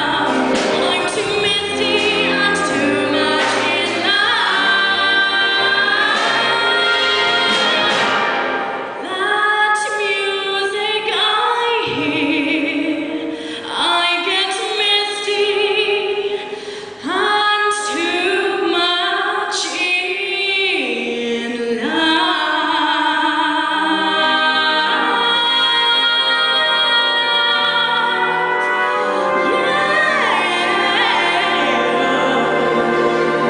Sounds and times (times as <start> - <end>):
Female singing: 0.0 - 8.2, 9.0 - 16.4, 17.0 - 32.7
Music: 0.0 - 33.5.